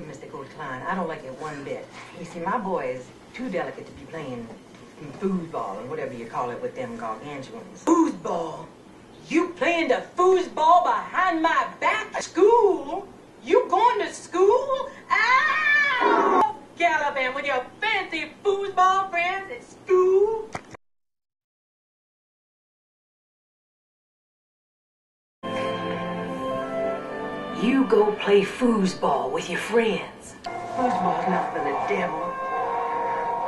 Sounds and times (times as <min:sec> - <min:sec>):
Speech: 0:00.0 - 0:08.7, 0:09.3 - 0:20.5
Music: 0:25.4 - 0:33.4.